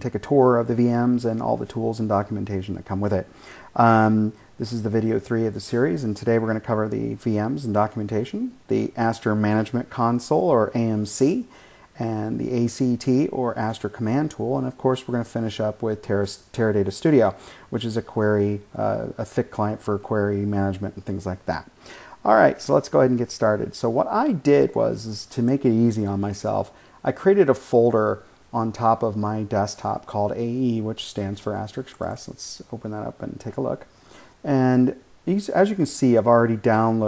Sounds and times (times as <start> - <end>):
Speech: 0.0 - 37.0.